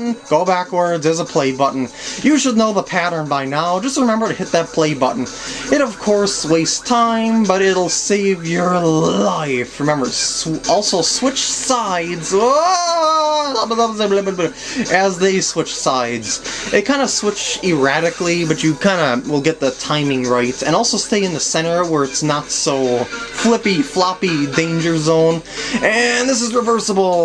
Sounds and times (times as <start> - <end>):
Music: 0.0 - 27.2
Speech: 0.0 - 27.2.